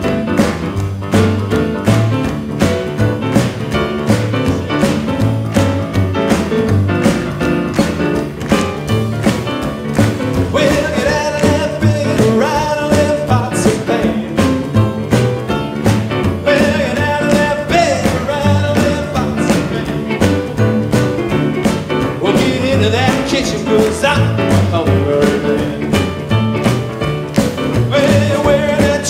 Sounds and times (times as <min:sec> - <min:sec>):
Music: 0:00.0 - 0:29.0.